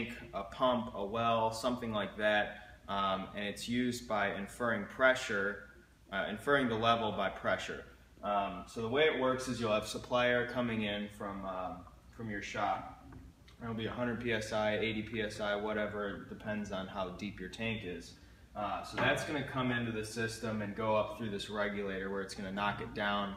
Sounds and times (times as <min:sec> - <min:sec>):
Speech: 0:00.0 - 0:13.0, 0:13.6 - 0:23.3.